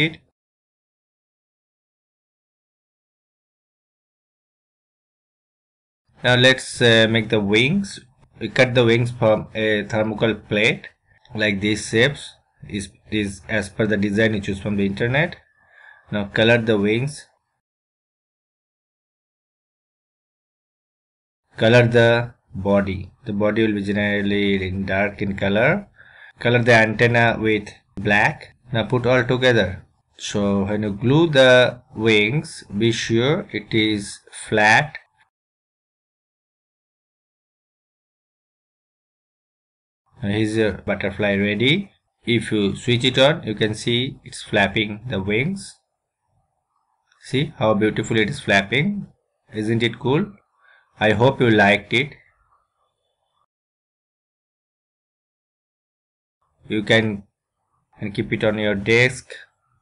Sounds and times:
Speech: 0.0s - 0.3s, 6.2s - 15.4s, 16.1s - 17.3s, 21.5s - 35.1s, 40.2s - 45.8s, 47.2s - 50.4s, 51.0s - 52.3s, 56.7s - 57.3s, 58.0s - 59.5s.

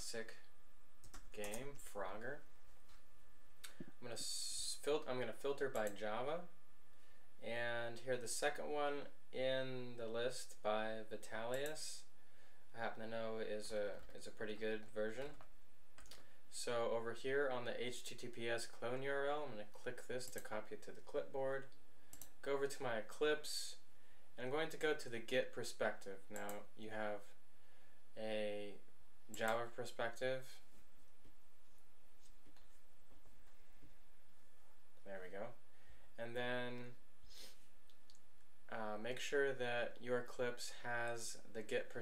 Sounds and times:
Speech: 0.0s - 0.5s, 1.3s - 2.5s, 4.0s - 6.6s, 7.4s - 12.1s, 12.7s - 15.4s, 16.5s - 21.8s, 22.4s - 27.4s, 28.2s - 30.7s, 35.0s - 35.6s, 36.2s - 37.0s, 38.7s - 42.0s.

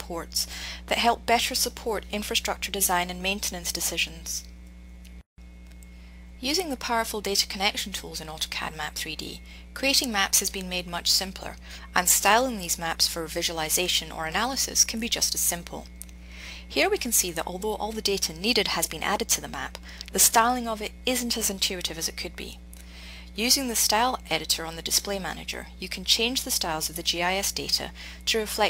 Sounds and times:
Speech: 0.0s - 4.5s, 6.4s - 15.9s, 16.7s - 22.6s, 23.4s - 28.7s.

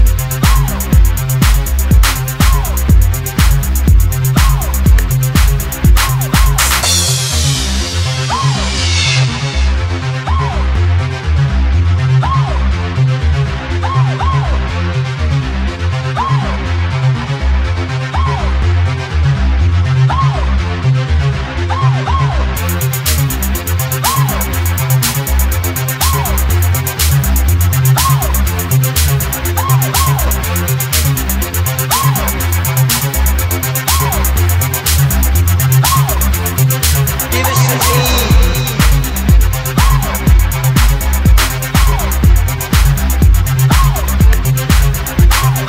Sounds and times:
Electronic music: 0.0s - 45.6s.

